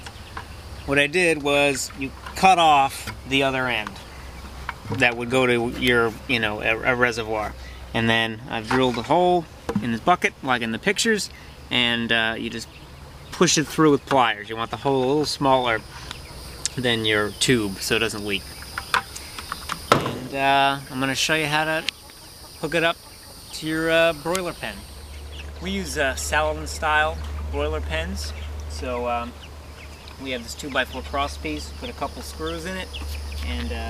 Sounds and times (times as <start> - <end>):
Speech: 0.9 - 4.0, 4.9 - 12.7, 13.4 - 15.9, 16.7 - 18.4, 20.2 - 21.9, 22.6 - 23.0, 23.6 - 24.8, 25.6 - 29.4, 30.2 - 33.9.